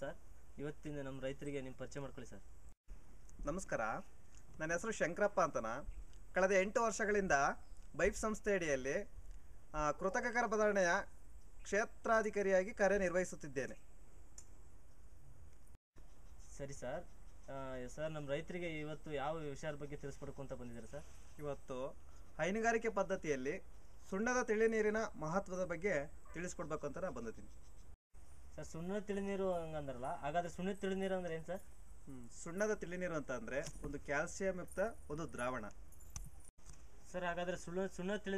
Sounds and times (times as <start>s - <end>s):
Speech: 0.0s - 2.4s, 3.4s - 9.1s, 9.8s - 11.1s, 16.5s - 27.4s, 28.6s - 35.8s, 37.1s - 38.3s.